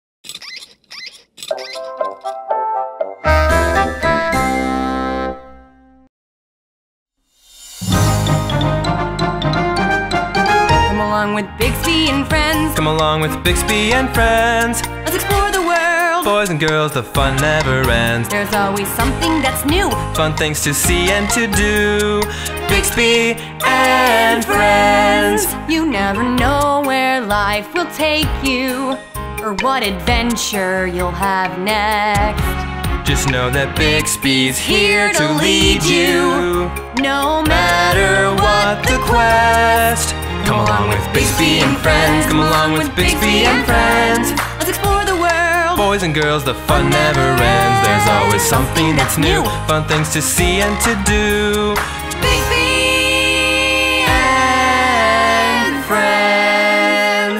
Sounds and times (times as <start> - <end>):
Music for children: 1.5 - 6.0, 7.8 - 57.2.